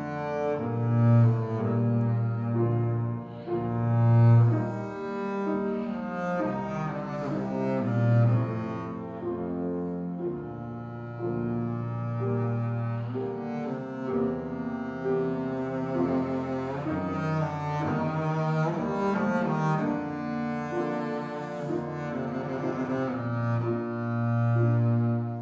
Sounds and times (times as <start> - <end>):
Double bass: 0.0 - 25.4.